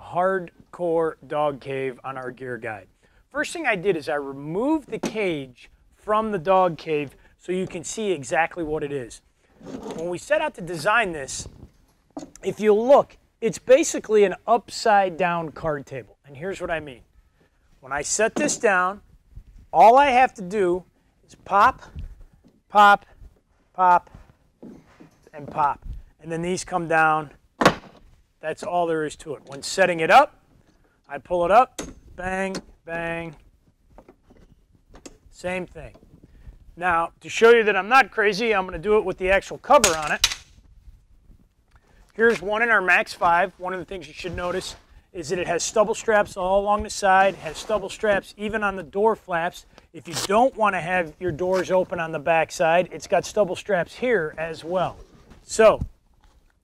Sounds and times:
Speech: 0.0 - 9.2, 9.8 - 11.6, 12.4 - 17.0, 17.8 - 19.0, 19.8 - 21.9, 22.7 - 23.0, 23.8 - 24.1, 25.3 - 27.4, 28.4 - 30.3, 31.1 - 33.4, 35.4 - 36.0, 36.8 - 40.2, 42.2 - 55.9.

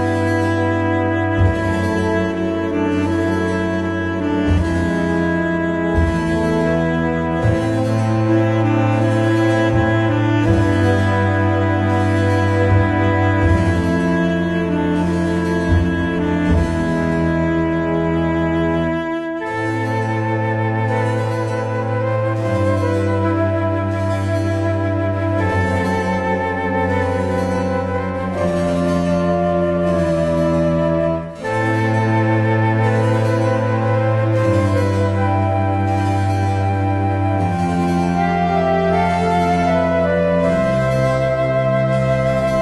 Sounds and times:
Classical music: 0.0 - 42.6
New-age music: 0.0 - 42.6.

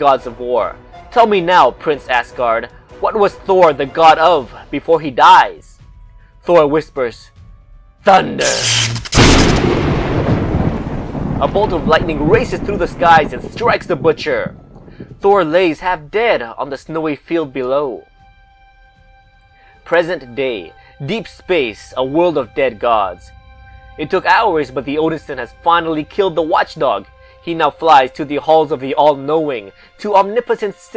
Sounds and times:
Speech: 0.0 - 5.8, 6.5 - 7.3, 8.1 - 8.7, 11.4 - 14.5, 15.2 - 18.0, 19.9 - 23.3, 24.0 - 30.9
Music: 0.0 - 30.9.

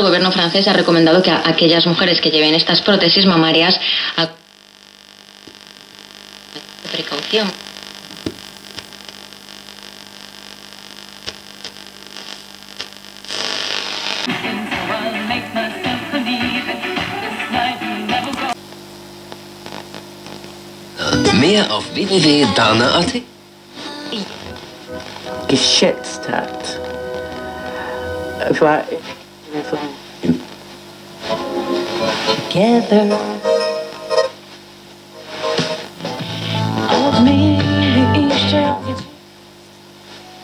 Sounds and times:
Hum: 0.0 - 40.4.

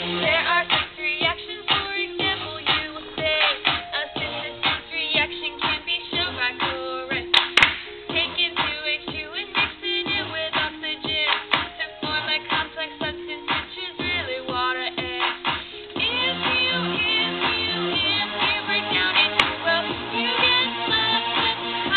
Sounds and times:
Music: 0.0 - 21.9.

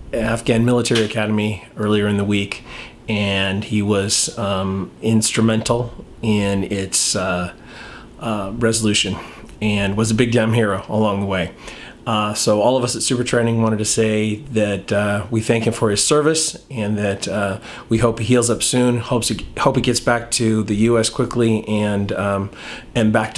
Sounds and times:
Speech: 0.1 - 7.6, 8.2 - 23.3.

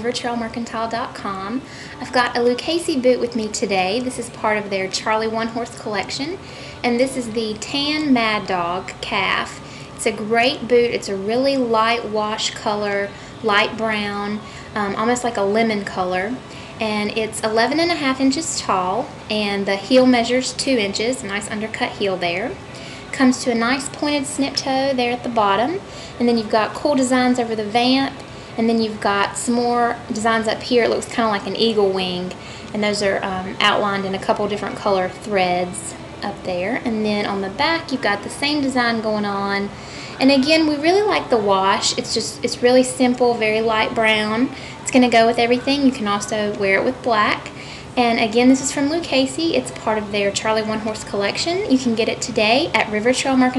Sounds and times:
Speech: 0.0 - 53.5.

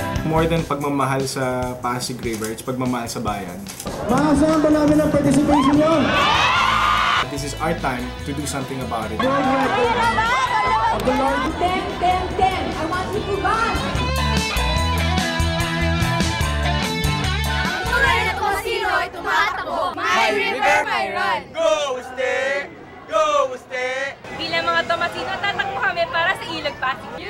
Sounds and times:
Music: 0.0 - 19.6.

